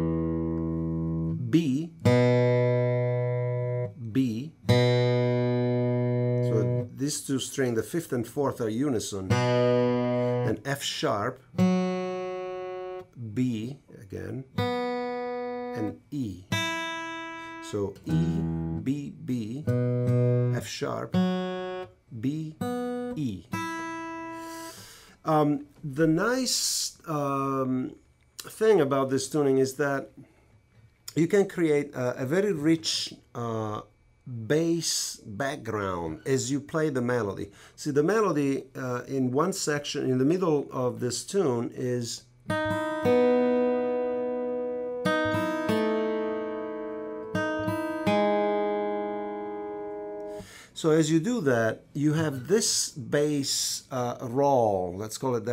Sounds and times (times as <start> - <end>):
Guitar: 0.0 - 55.5
Speech: 1.4 - 2.0, 4.0 - 4.6, 6.4 - 9.4, 10.5 - 11.4, 13.2 - 14.5, 15.8 - 16.5, 17.6 - 19.8, 20.5 - 21.2, 22.1 - 23.5, 25.2 - 30.2, 31.1 - 42.3, 50.8 - 55.5.